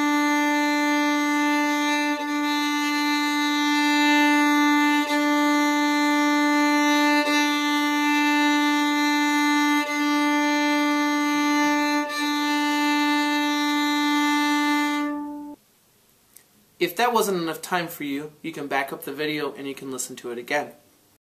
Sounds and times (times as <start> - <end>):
Violin, fiddle: 0.0 - 15.6
Speech: 16.8 - 20.8.